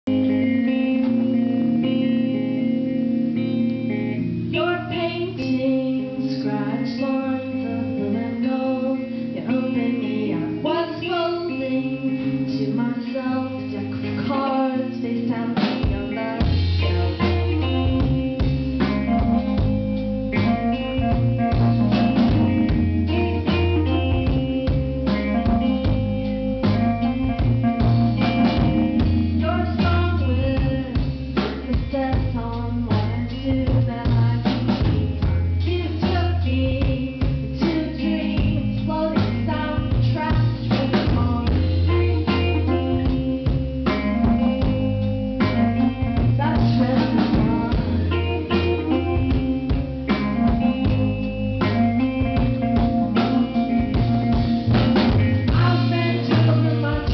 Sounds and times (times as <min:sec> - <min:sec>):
Music: 0:00.0 - 0:57.1.